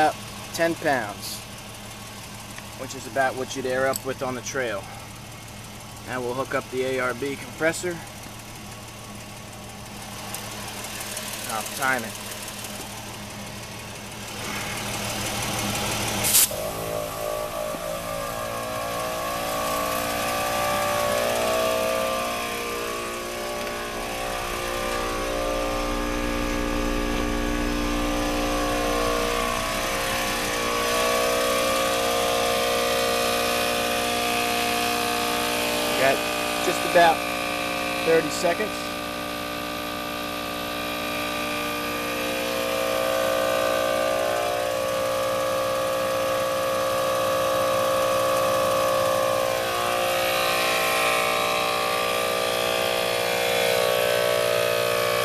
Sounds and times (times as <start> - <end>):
Speech: 0.0 - 1.4, 2.8 - 4.9, 6.1 - 8.1, 11.5 - 12.2, 36.0 - 37.2, 38.0 - 38.9.